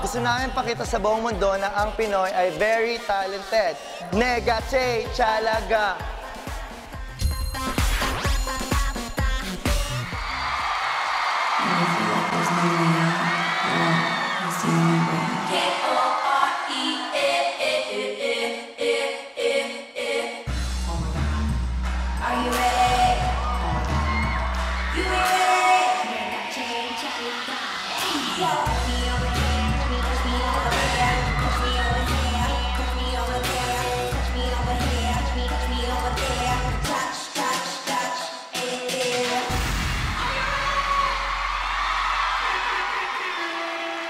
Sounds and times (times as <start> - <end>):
Exciting music: 0.0 - 10.6, 20.5 - 37.1.